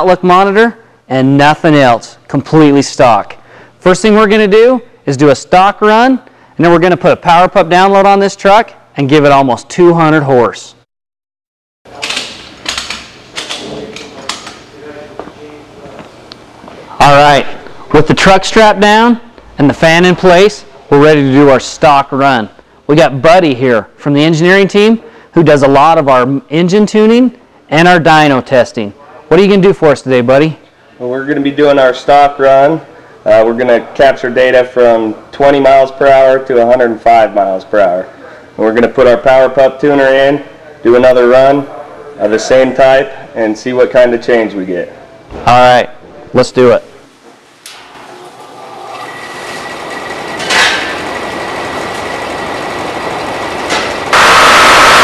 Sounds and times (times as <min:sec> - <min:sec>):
Speech: 0:00.0 - 0:10.8, 0:13.6 - 0:16.1, 0:16.9 - 0:47.0.